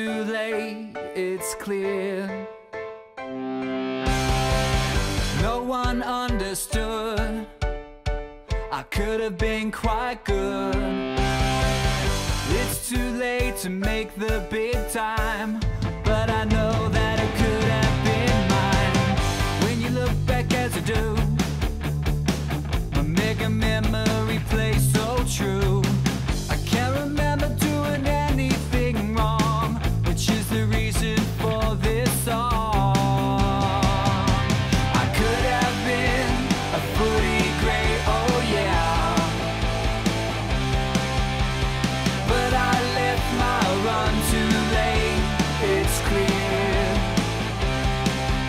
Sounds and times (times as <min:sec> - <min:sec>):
Rhythm and blues: 0:03.5 - 0:48.4.